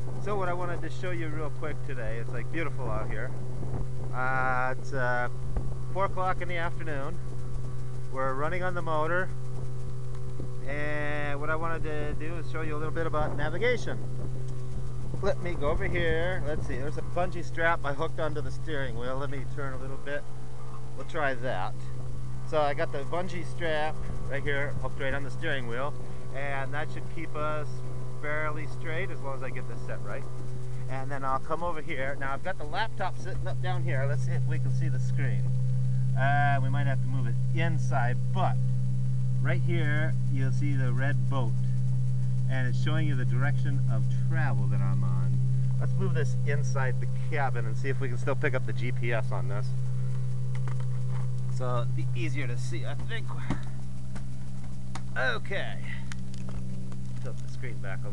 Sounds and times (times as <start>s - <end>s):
Speech: 0.2s - 3.4s, 4.1s - 5.3s, 5.9s - 7.2s, 8.1s - 9.4s, 10.6s - 14.0s, 15.2s - 20.3s, 21.0s - 21.9s, 22.5s - 35.5s, 36.2s - 38.6s, 39.4s - 41.7s, 42.5s - 49.8s, 51.6s - 53.6s, 55.2s - 56.1s, 57.2s - 58.1s.